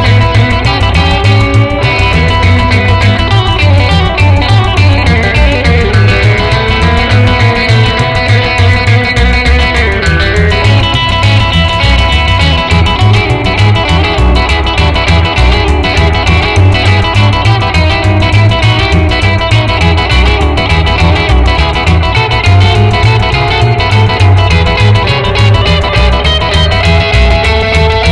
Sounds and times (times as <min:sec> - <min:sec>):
Acoustic guitar: 0:00.0 - 0:28.1.